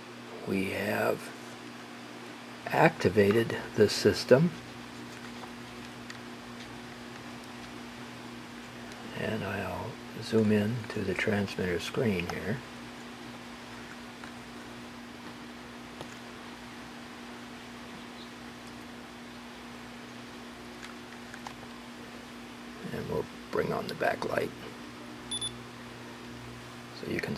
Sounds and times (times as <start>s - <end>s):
Speech: 0.4s - 1.4s, 2.6s - 4.6s, 9.1s - 12.6s, 22.8s - 24.7s, 26.9s - 27.3s.